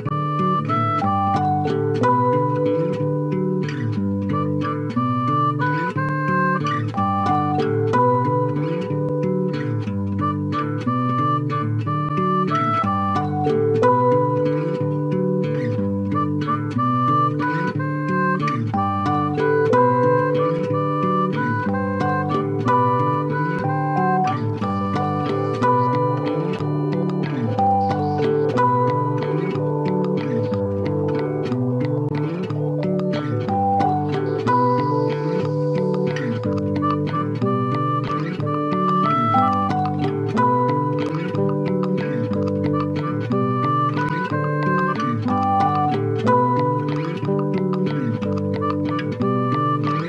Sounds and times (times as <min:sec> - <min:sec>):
Music: 0:00.0 - 0:50.0.